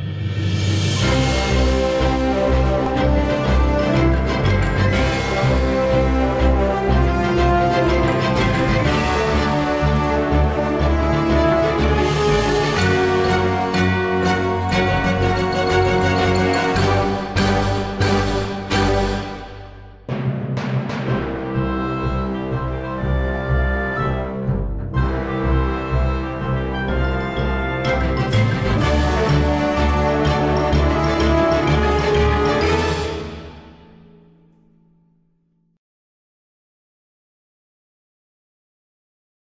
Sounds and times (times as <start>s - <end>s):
Timpani: 0.0s - 34.5s.